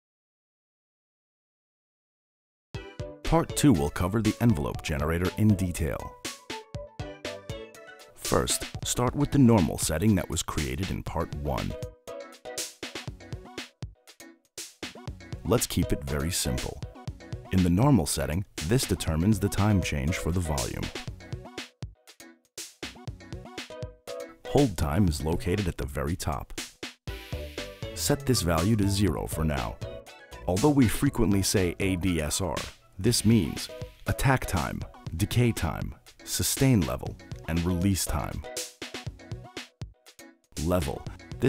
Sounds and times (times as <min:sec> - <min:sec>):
Speech: 0:03.3 - 0:06.1, 0:08.2 - 0:11.8, 0:15.5 - 0:16.8, 0:17.5 - 0:21.0, 0:24.5 - 0:26.6, 0:28.0 - 0:29.8, 0:30.5 - 0:38.5, 0:40.6 - 0:41.4.